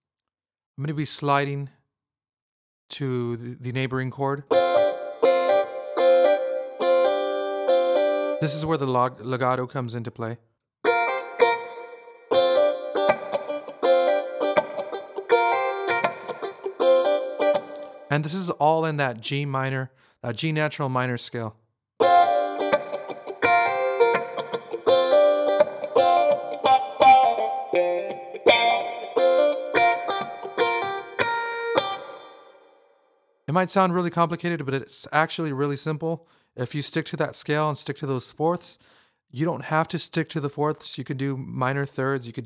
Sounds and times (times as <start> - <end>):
Speech: 0.8 - 1.8, 2.9 - 4.5, 8.4 - 10.4, 18.1 - 21.6, 33.5 - 38.8, 39.4 - 42.4.